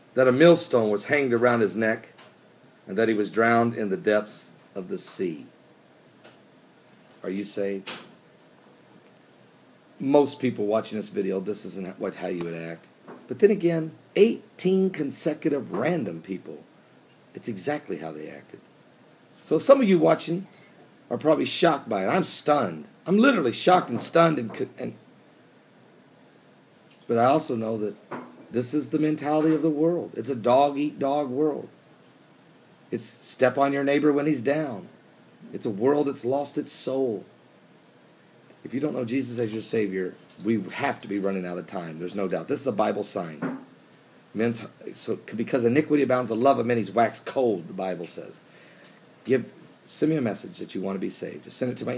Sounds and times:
Speech: 0:00.2 - 0:02.2, 0:02.9 - 0:05.5, 0:07.2 - 0:08.1, 0:10.0 - 0:16.7, 0:17.3 - 0:18.6, 0:19.4 - 0:25.0, 0:27.1 - 0:31.7, 0:32.9 - 0:34.9, 0:35.5 - 0:37.3, 0:38.6 - 0:43.5, 0:44.4 - 0:48.5, 0:49.2 - 0:51.9.

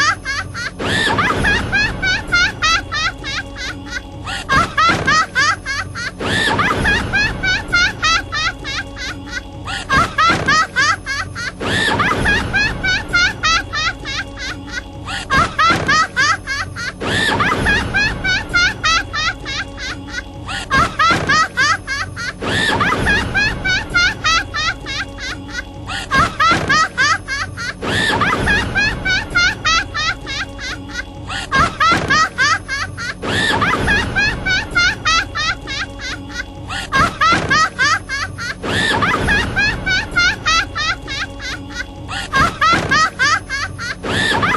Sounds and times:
Laughter: 0:00.0 - 0:44.5
Music: 0:00.0 - 0:44.5.

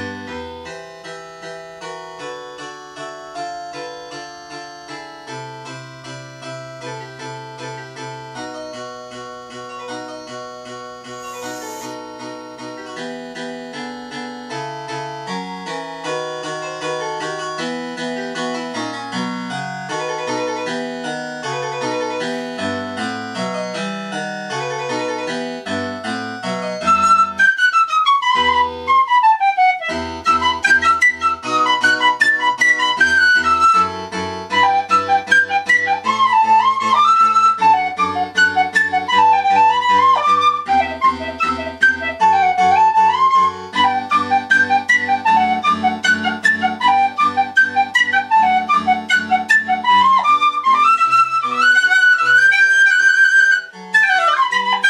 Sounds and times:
Harpsichord: 0:00.0 - 0:54.8.

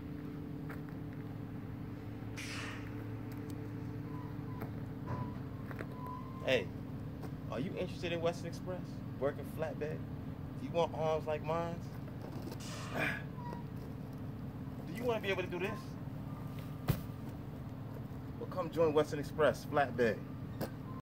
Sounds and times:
Vehicle: 0:00.0 - 0:21.0
Speech: 0:06.4 - 0:06.7, 0:07.5 - 0:10.0, 0:10.6 - 0:12.0, 0:14.9 - 0:16.0, 0:18.4 - 0:20.3.

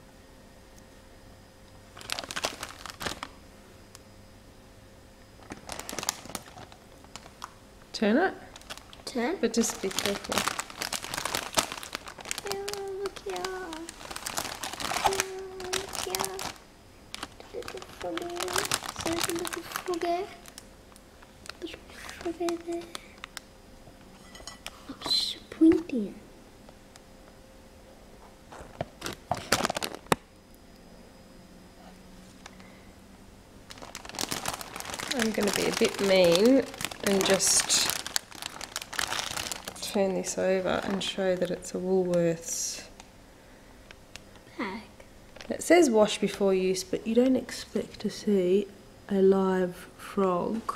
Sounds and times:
Speech: 0:09.1 - 0:10.4, 0:12.4 - 0:13.9, 0:15.0 - 0:16.4, 0:17.4 - 0:20.4, 0:21.6 - 0:23.0, 0:24.9 - 0:26.2, 0:35.1 - 0:37.9, 0:39.8 - 0:43.0, 0:44.5 - 0:50.7.

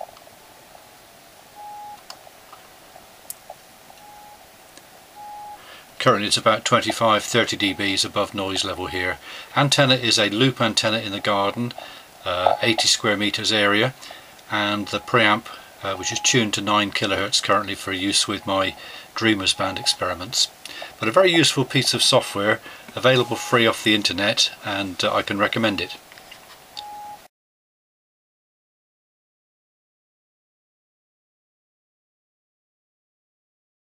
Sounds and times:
Speech: 0:06.0 - 0:26.0.

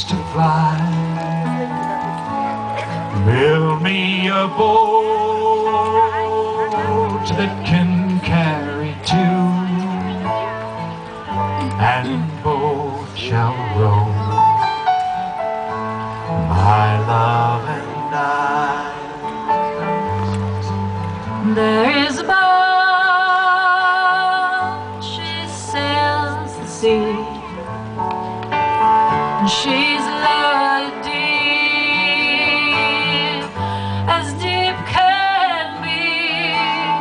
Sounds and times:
Music: 0:00.0 - 0:37.0.

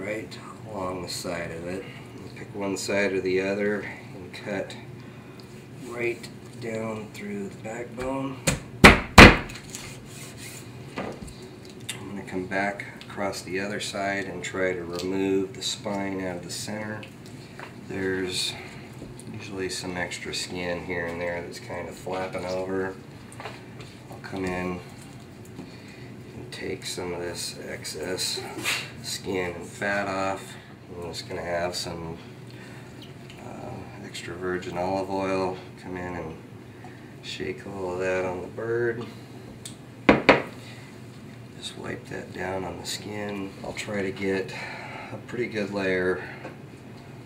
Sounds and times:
Speech: 0:00.0 - 0:04.9, 0:05.8 - 0:08.5, 0:11.9 - 0:17.1, 0:17.9 - 0:18.6, 0:19.3 - 0:23.0, 0:24.1 - 0:24.9, 0:26.4 - 0:32.2, 0:33.4 - 0:36.4, 0:37.2 - 0:39.1, 0:41.6 - 0:46.3.

